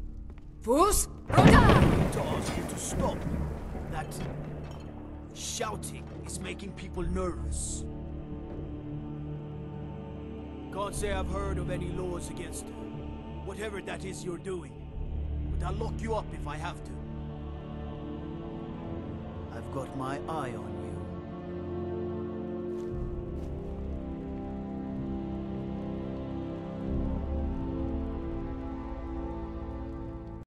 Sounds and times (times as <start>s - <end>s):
Music: 0.0s - 30.4s.